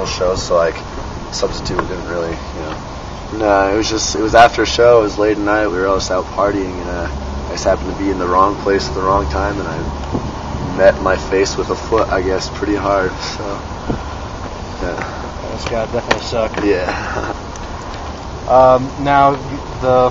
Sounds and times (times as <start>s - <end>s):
Speech: 0.0s - 0.8s, 1.4s - 9.9s, 10.7s - 13.7s, 14.8s - 17.0s, 18.5s - 20.1s.